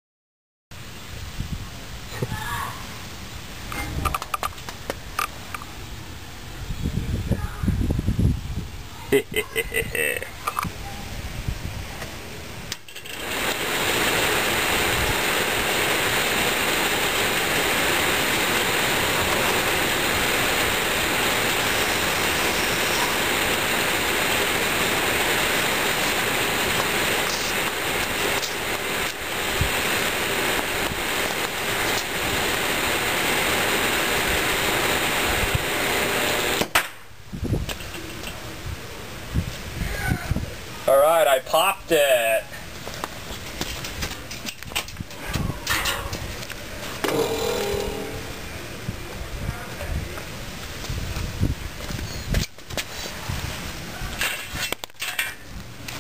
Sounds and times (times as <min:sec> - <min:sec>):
Mechanical fan: 0:09.9 - 0:41.3, 0:42.6 - 0:56.0.